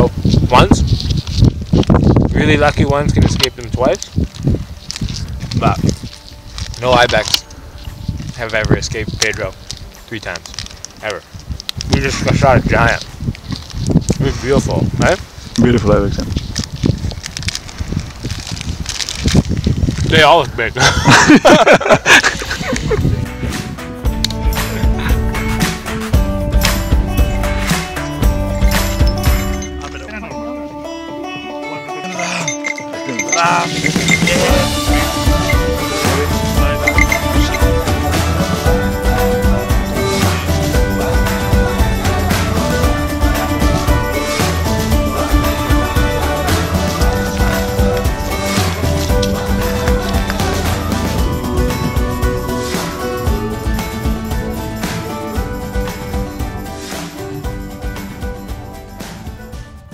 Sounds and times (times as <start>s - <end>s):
Music: 0.0s - 17.6s, 20.1s - 59.9s.